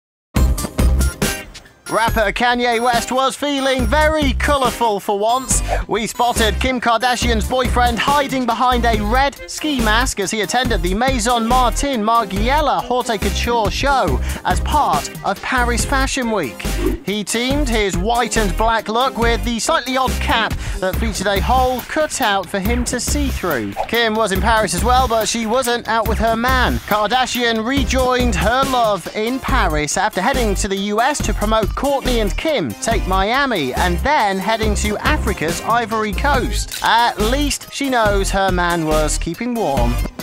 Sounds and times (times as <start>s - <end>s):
Music: 0.3s - 40.2s
Speech: 1.9s - 40.0s.